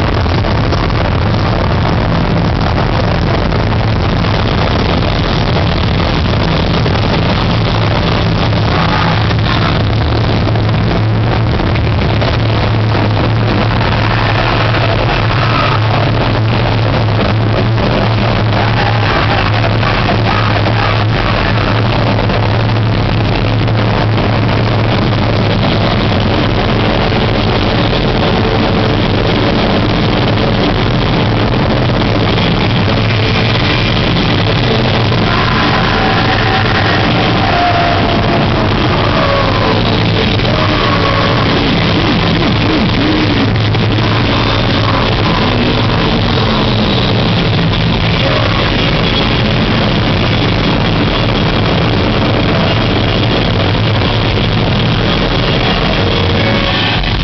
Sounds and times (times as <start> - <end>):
Music: 0.0 - 57.2
Vibration: 0.0 - 57.2
White noise: 0.0 - 57.2.